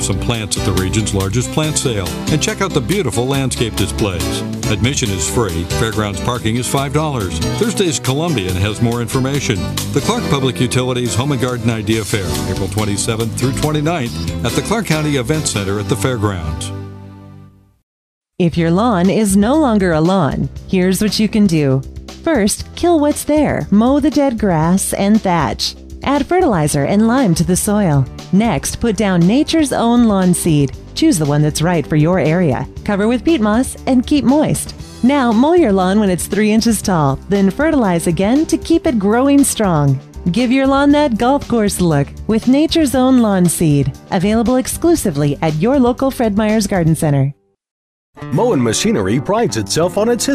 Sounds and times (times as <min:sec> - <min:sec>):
Speech: 0:00.0 - 0:16.8, 0:18.4 - 0:47.4, 0:48.3 - 0:50.3
Music: 0:00.0 - 0:17.8, 0:18.4 - 0:47.6, 0:48.2 - 0:50.3.